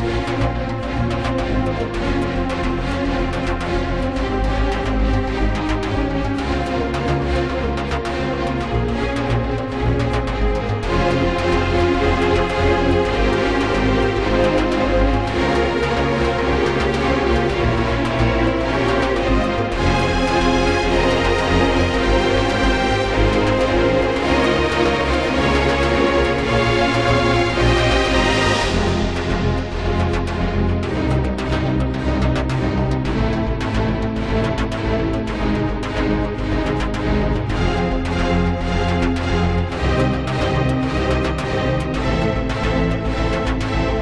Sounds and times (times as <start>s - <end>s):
Music: 0.0s - 44.0s.